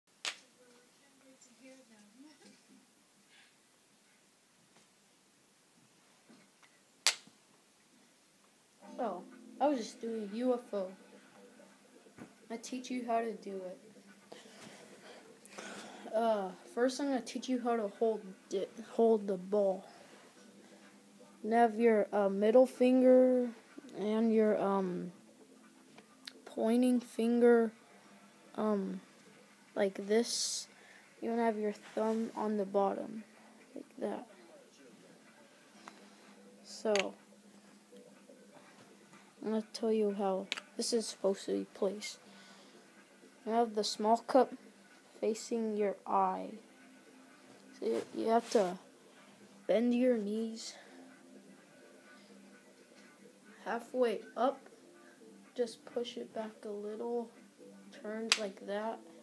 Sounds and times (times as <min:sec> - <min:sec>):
Inside, small room: 0:00.1 - 0:59.2
Child speech, kid speaking: 0:00.4 - 0:02.6, 0:08.8 - 0:11.0, 0:12.5 - 0:13.8, 0:16.0 - 0:20.0, 0:21.4 - 0:25.2, 0:26.3 - 0:27.8, 0:28.5 - 0:29.0, 0:29.8 - 0:34.3, 0:36.6 - 0:37.2, 0:39.4 - 0:42.2, 0:43.4 - 0:44.6, 0:45.2 - 0:46.6, 0:47.7 - 0:48.8, 0:49.7 - 0:50.9, 0:53.6 - 0:54.7, 0:55.5 - 0:59.0.